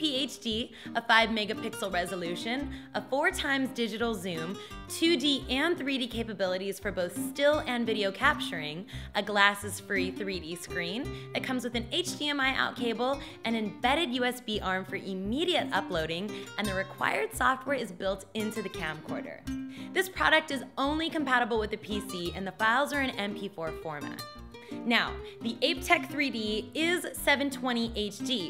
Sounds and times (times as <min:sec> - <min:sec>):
Speech: 0:00.0 - 0:19.4, 0:20.0 - 0:24.2, 0:24.9 - 0:28.5
Music: 0:00.0 - 0:28.5.